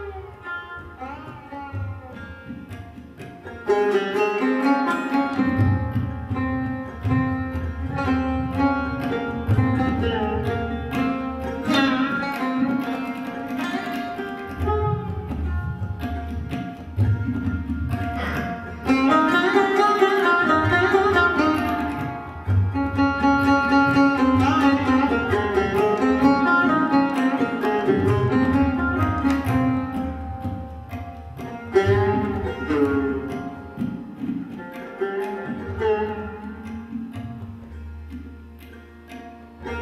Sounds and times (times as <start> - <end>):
Carnatic music: 0.0 - 39.8
Sitar: 0.0 - 39.8
Tabla: 0.0 - 39.8.